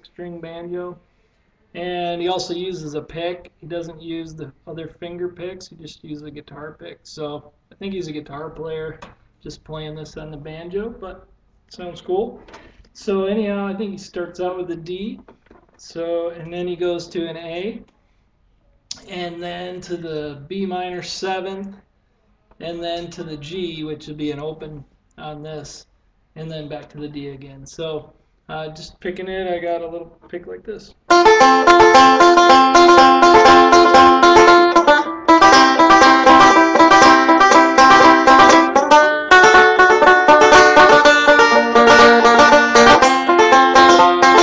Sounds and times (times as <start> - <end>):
Banjo: 31.1 - 44.4.